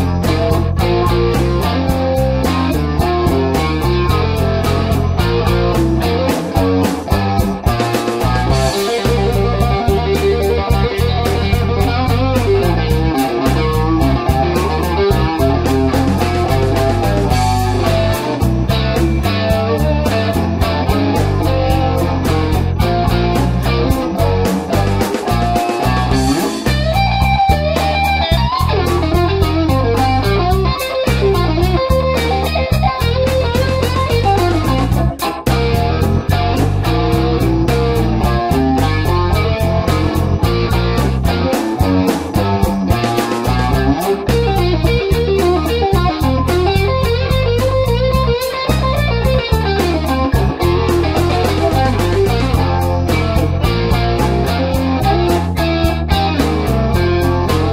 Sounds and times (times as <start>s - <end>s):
Strum: 0.0s - 57.7s.